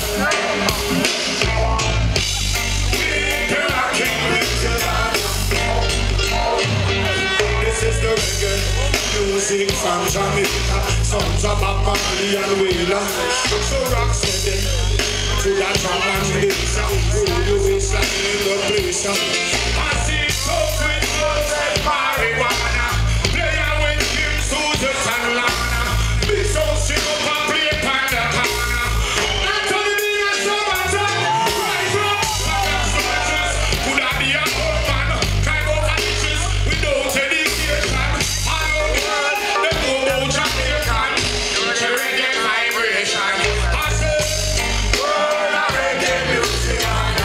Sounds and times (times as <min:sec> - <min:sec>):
Pop music: 0:00.0 - 0:47.2.